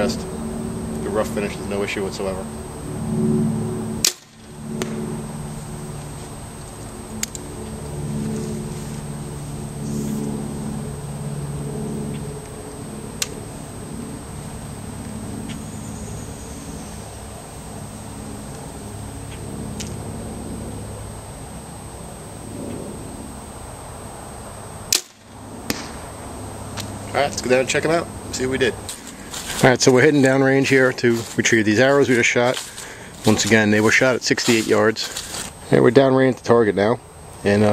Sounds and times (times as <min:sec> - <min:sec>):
Outside, rural or natural: 0:00.0 - 0:37.7
Arrow: 0:04.0 - 0:05.0, 0:24.9 - 0:26.0.